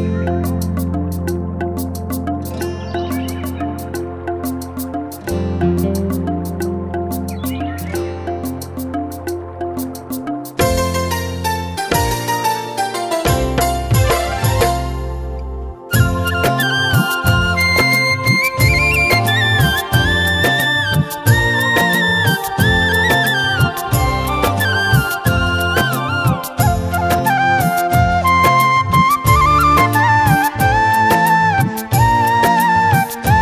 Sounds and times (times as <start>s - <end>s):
Traditional music: 0.0s - 33.4s.